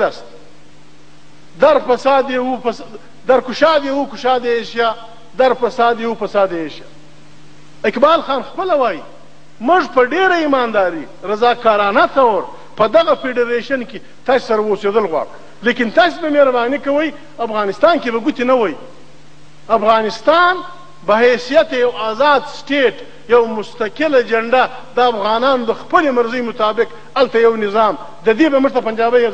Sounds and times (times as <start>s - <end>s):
Male speech, man speaking: 0.0s - 0.4s, 1.6s - 6.9s, 7.8s - 18.9s, 19.7s - 29.3s
Narration, monologue: 0.0s - 29.3s.